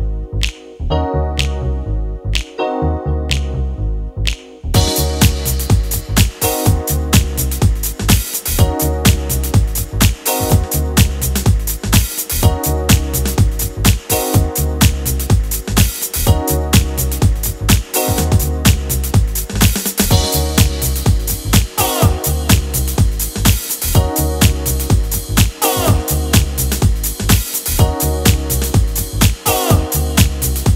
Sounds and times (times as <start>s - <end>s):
Music: 0.0s - 30.7s.